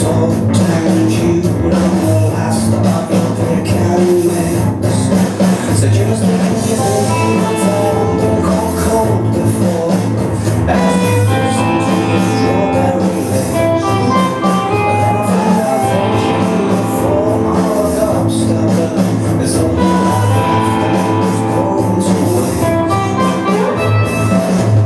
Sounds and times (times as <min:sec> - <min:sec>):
Music: 0:00.0 - 0:24.8.